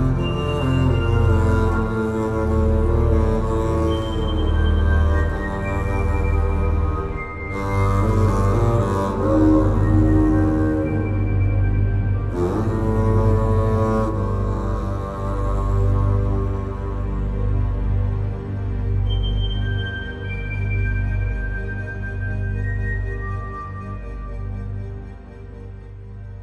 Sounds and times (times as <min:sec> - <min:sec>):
Double bass: 0:00.0 - 0:26.4.